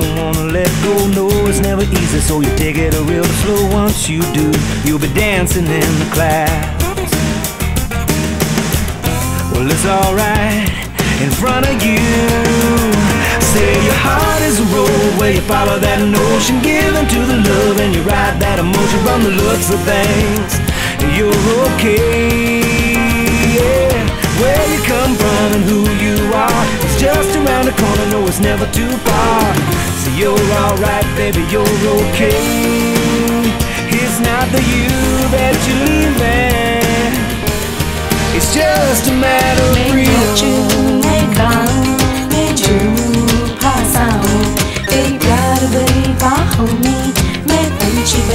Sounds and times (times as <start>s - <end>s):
Music: 0.0s - 48.3s.